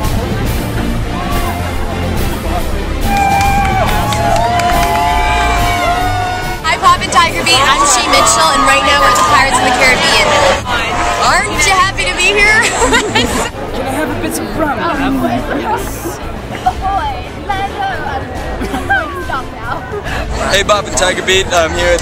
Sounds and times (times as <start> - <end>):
Music: 0.0 - 22.0.